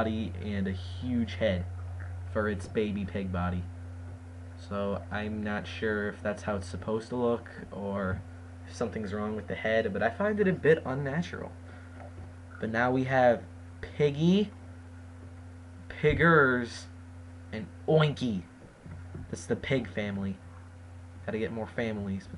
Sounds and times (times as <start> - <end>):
Speech: 0.0 - 1.7, 2.3 - 3.7, 4.6 - 11.6, 12.6 - 14.6, 15.9 - 18.5, 19.3 - 20.4, 21.2 - 22.3.